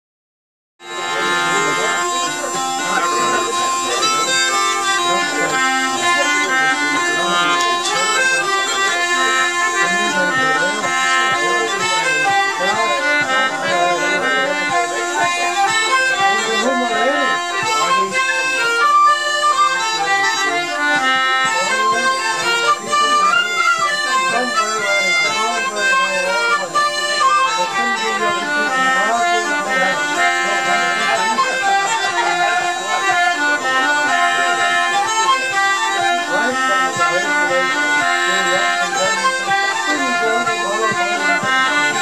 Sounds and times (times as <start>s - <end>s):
Music: 0.8s - 42.0s
Speech: 0.8s - 42.0s.